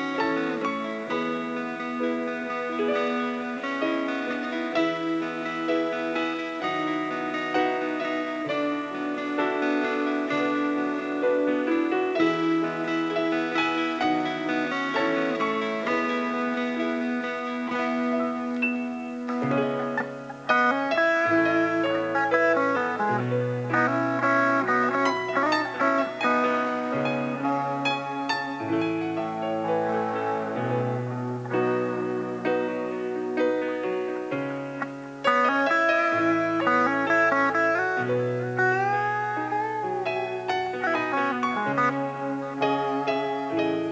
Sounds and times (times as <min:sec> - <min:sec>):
Guitar: 0:00.0 - 0:43.9.